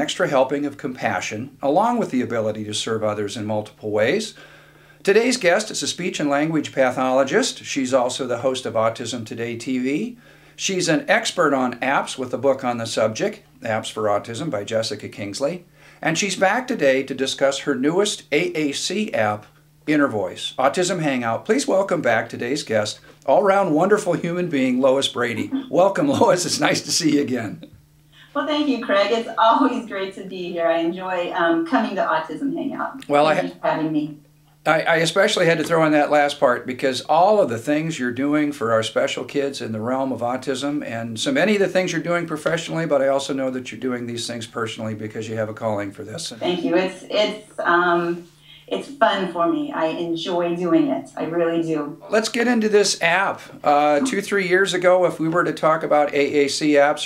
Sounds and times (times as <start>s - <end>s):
Male speech, man speaking: 0.0s - 4.4s, 5.0s - 27.7s, 33.0s - 33.8s, 34.7s - 47.3s, 52.1s - 57.0s
Narration, monologue: 0.0s - 57.0s.